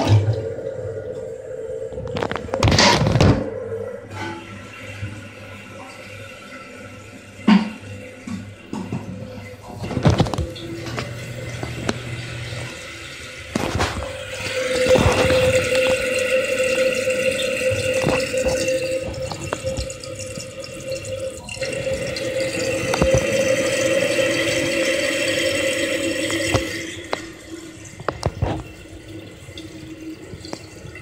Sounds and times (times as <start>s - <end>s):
Toilet flush: 0.0s - 31.0s.